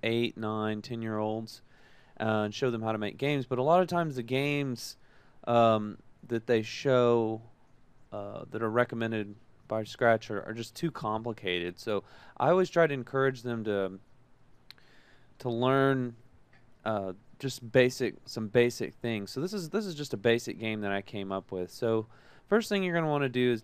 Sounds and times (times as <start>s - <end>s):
Speech: 0.0s - 1.6s, 2.2s - 7.5s, 8.2s - 14.0s, 15.4s - 16.2s, 16.9s - 23.6s.